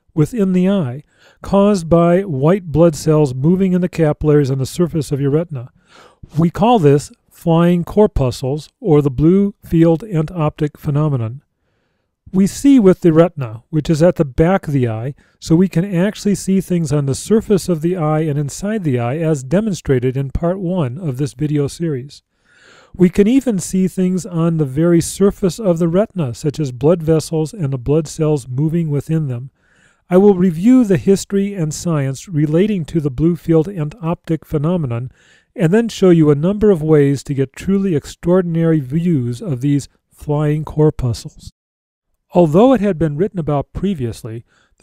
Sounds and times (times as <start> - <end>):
Speech: 0.0 - 5.7, 6.3 - 11.5, 12.3 - 22.2, 23.0 - 29.5, 30.1 - 41.6, 42.3 - 44.5.